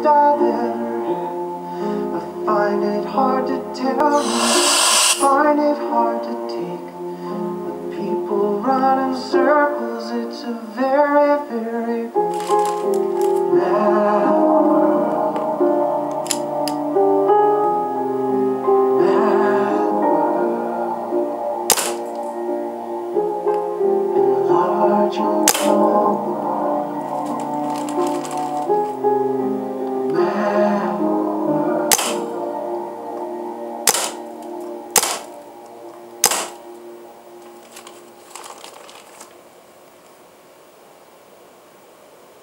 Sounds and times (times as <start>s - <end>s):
Music: 0.0s - 38.5s.